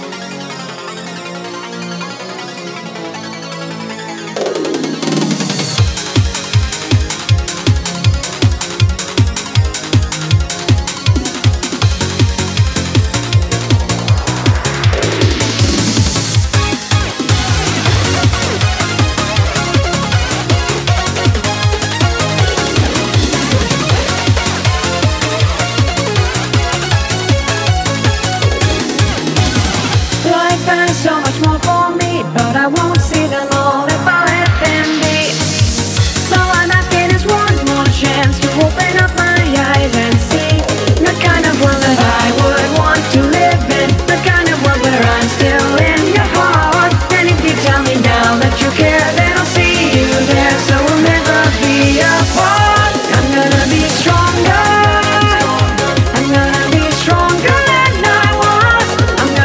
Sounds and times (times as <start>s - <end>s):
Music: 0.0s - 59.4s.